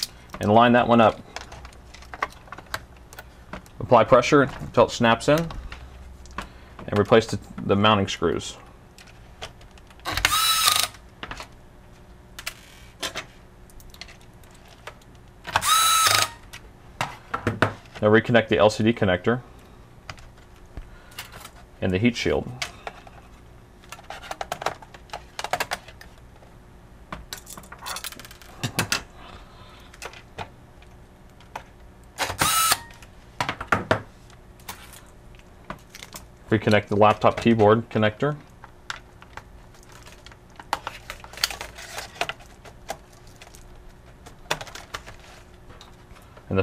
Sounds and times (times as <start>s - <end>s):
Speech: 0.4s - 1.2s, 3.8s - 5.5s, 6.9s - 8.6s, 18.0s - 19.4s, 21.8s - 22.6s, 36.5s - 38.4s.